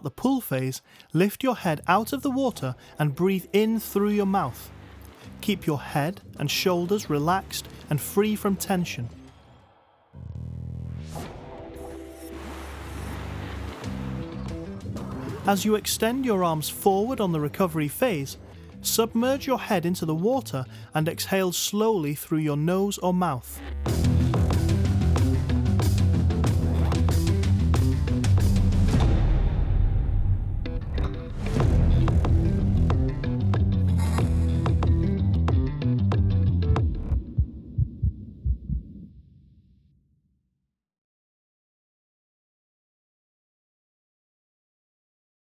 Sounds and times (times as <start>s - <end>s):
Speech: 0.0s - 4.7s, 5.4s - 9.2s, 15.3s - 23.7s
Music: 1.4s - 38.3s.